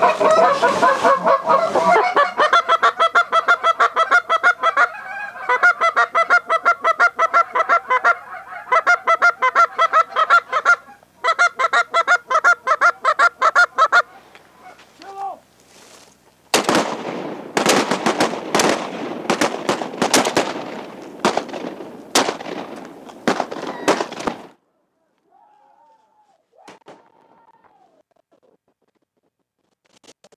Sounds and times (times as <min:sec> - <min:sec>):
Duck: 0:00.0 - 0:14.9.